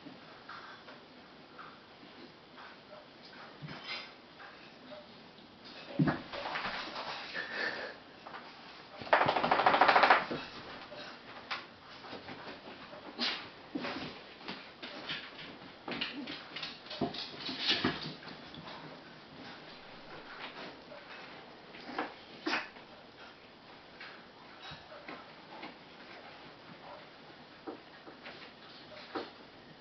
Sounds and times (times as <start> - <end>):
Inside, small room: 0.0 - 29.8.